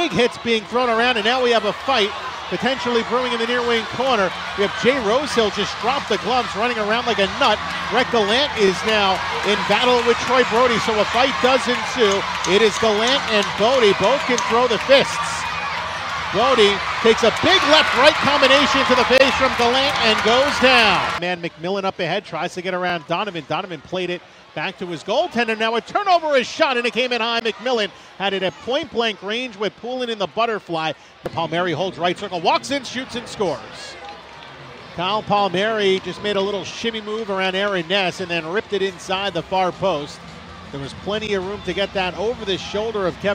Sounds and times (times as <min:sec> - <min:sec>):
Speech: 0:00.0 - 0:15.4, 0:16.3 - 0:34.0, 0:35.0 - 0:43.3.